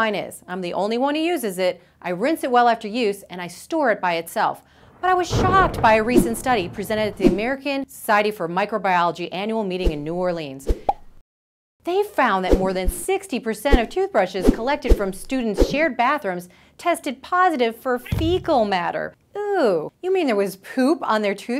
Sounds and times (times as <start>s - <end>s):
Speech: 0.0s - 10.7s, 11.8s - 21.5s
Plop: 10.8s - 11.0s.